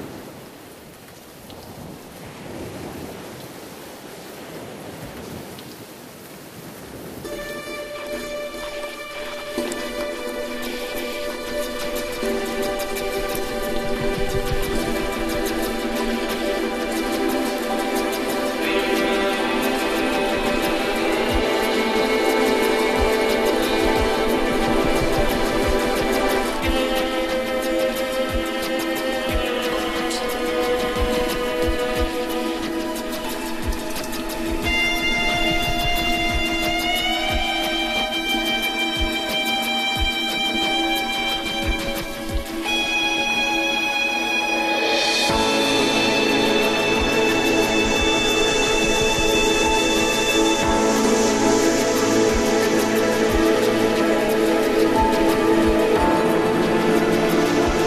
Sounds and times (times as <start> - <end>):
Music: 7.2 - 57.8.